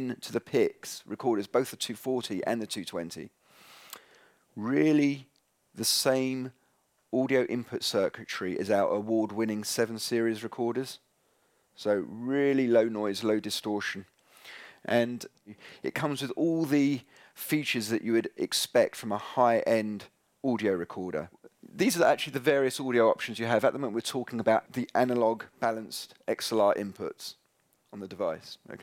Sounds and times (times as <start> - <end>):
Speech: 0.0 - 3.3, 4.6 - 6.6, 7.2 - 11.0, 11.8 - 14.1, 14.9 - 28.8.